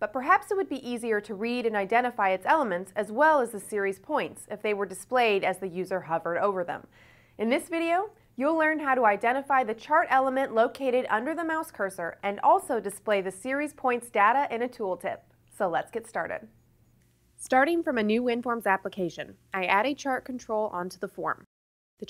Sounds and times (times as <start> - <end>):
Speech: 0.0 - 16.5, 17.4 - 22.0.